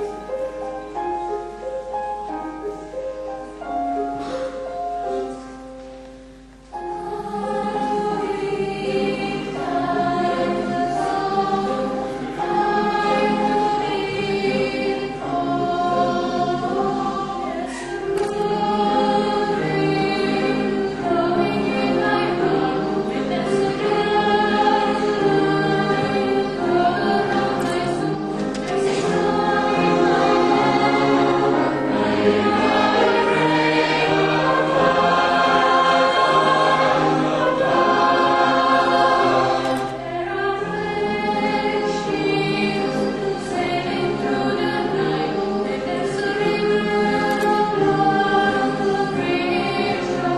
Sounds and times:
Gospel music: 0.0 - 50.3
Vocal music: 6.2 - 50.3
Choir: 6.7 - 50.3.

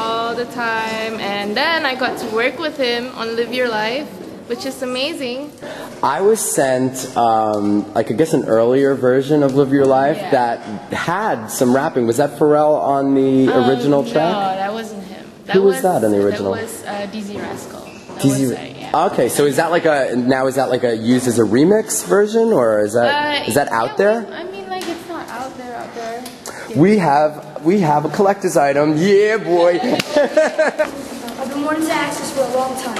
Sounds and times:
Female speech, woman speaking: 0.0 - 5.6, 10.1 - 10.5, 13.4 - 19.0, 23.0 - 27.0, 29.5 - 30.2, 31.4 - 32.9.

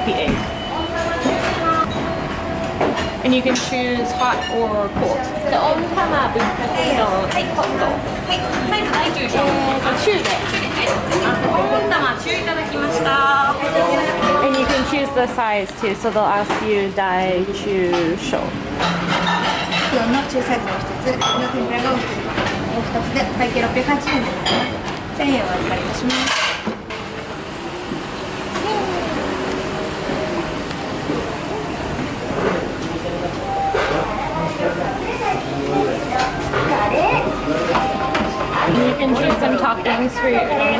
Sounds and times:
Inside, public space: 0.0 - 40.7.

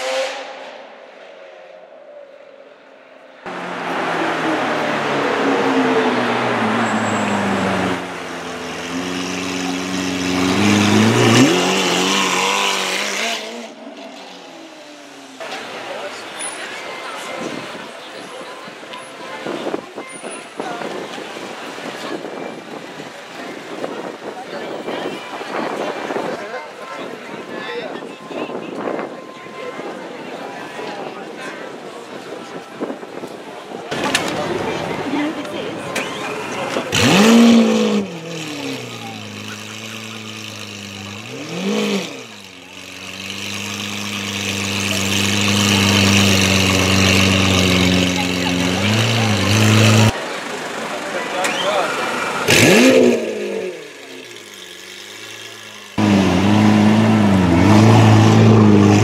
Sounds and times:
Speech: 15.4 - 37.0, 38.3 - 41.2, 44.8 - 52.6.

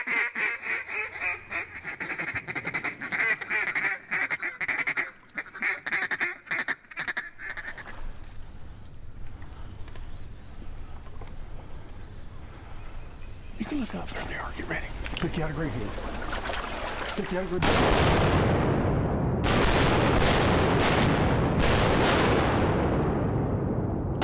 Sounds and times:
Gunshot, gunfire: 17.6 - 18.8, 19.4 - 23.2.

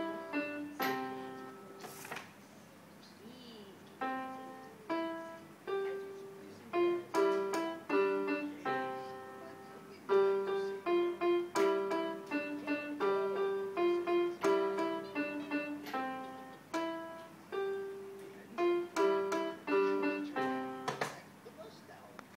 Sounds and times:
Music: 0.0 - 1.9, 4.0 - 21.1
Speech: 2.7 - 5.0, 5.8 - 10.9, 18.2 - 22.3.

